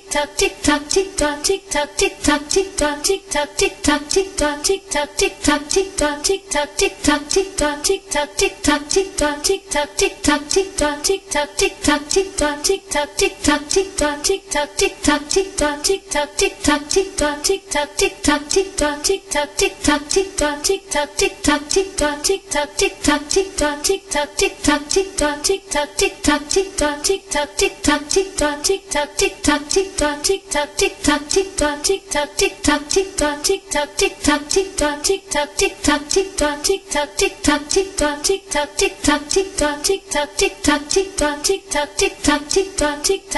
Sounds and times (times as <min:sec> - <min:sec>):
Tick: 0:03.6 - 0:04.6, 0:05.2 - 0:06.2, 0:06.8 - 0:14.2, 0:14.8 - 0:15.8, 0:18.1 - 0:20.6, 0:21.2 - 0:43.3.